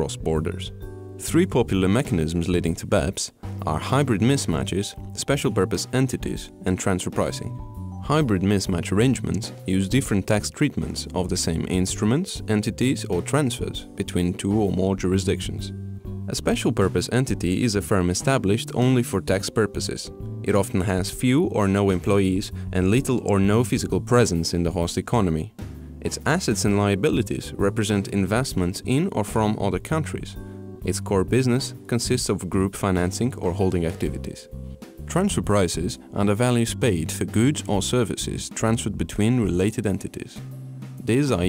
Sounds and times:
Speech: 0.0s - 34.5s, 35.1s - 40.4s, 41.1s - 41.4s
Music: 0.0s - 41.4s.

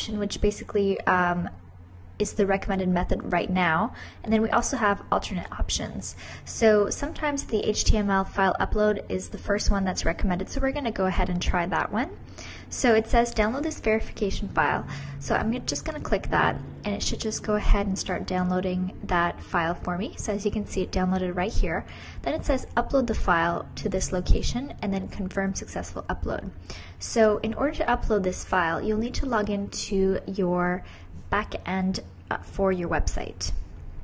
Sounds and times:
Speech: 0.0s - 1.6s, 2.2s - 33.6s.

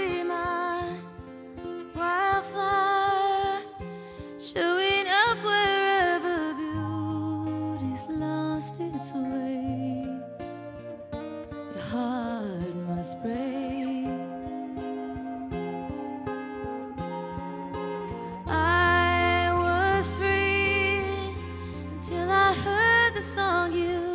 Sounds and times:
Music: 0.0s - 24.1s.

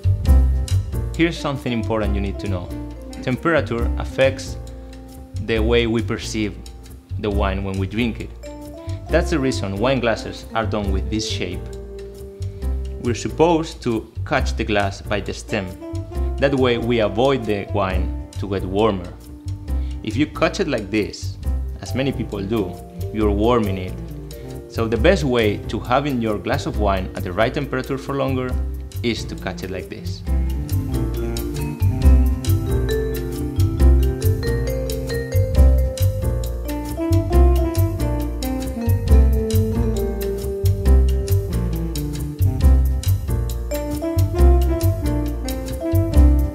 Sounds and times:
Music: 0.0s - 46.5s
Speech: 1.2s - 4.6s, 5.4s - 6.6s, 7.2s - 8.3s, 9.1s - 11.7s, 13.0s - 15.8s, 16.4s - 19.2s, 20.0s - 24.0s, 24.7s - 30.3s.

